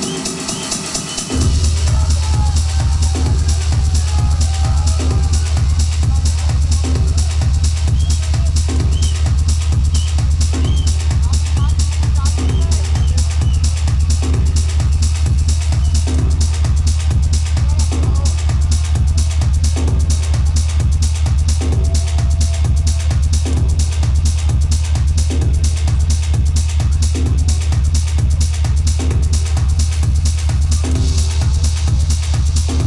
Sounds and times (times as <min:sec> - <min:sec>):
Techno: 0:00.0 - 0:32.8.